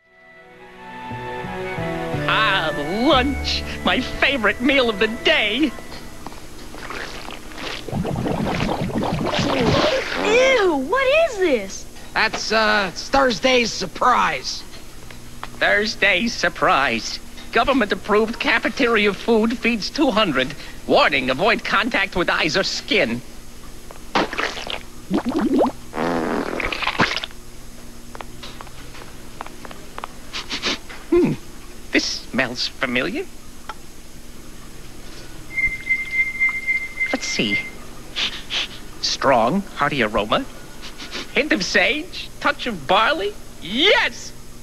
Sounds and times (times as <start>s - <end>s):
Speech: 2.3s - 5.8s, 9.6s - 14.7s, 15.6s - 23.3s, 31.2s - 33.3s, 37.1s - 37.7s, 39.0s - 40.5s, 41.4s - 44.4s.